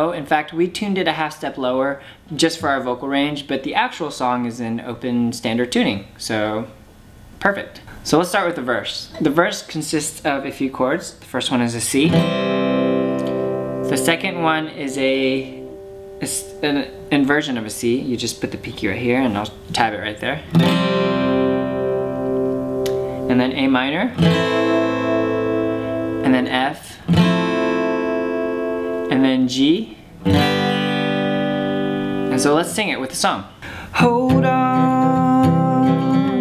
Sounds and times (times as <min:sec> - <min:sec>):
Speech: 0:00.0 - 0:06.8, 0:07.4 - 0:12.2, 0:13.9 - 0:15.6, 0:16.2 - 0:20.5, 0:23.3 - 0:24.2, 0:26.2 - 0:27.1, 0:29.1 - 0:30.0, 0:32.3 - 0:36.4
Acoustic guitar: 0:11.9 - 0:36.4
Strum: 0:12.1 - 0:29.4, 0:30.2 - 0:32.7, 0:34.0 - 0:36.4.